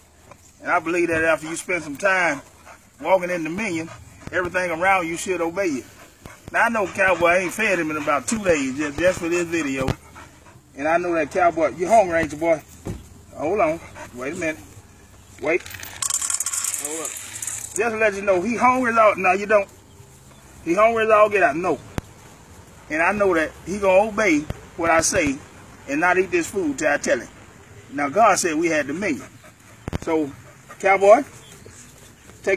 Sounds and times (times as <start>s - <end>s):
Dog: 1.4s - 10.7s, 28.8s - 31.6s
Speech: 6.5s - 10.0s, 17.8s - 19.7s, 20.7s - 21.8s, 22.9s - 27.3s.